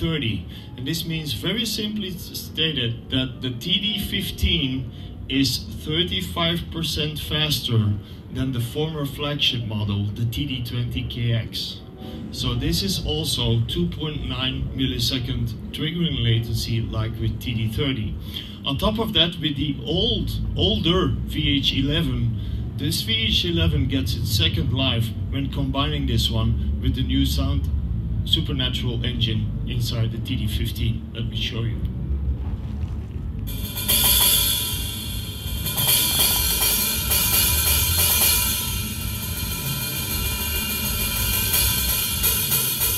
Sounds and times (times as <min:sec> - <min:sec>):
Speech: 0:00.0 - 0:31.9.